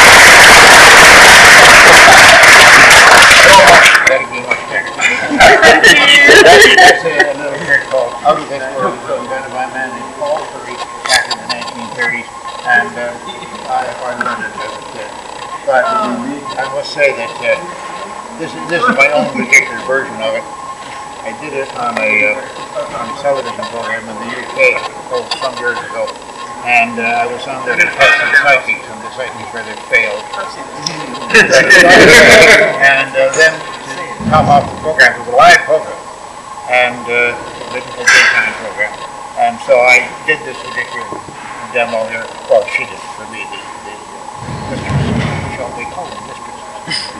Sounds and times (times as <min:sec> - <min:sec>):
Radio: 0:00.0 - 0:36.0, 0:36.9 - 0:47.0.